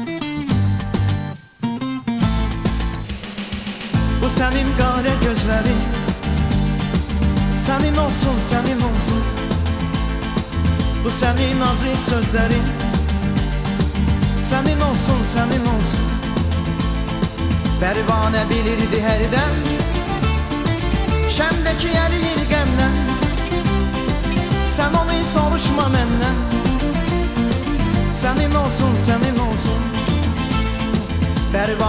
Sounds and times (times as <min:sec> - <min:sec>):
Music: 0:00.0 - 0:31.8.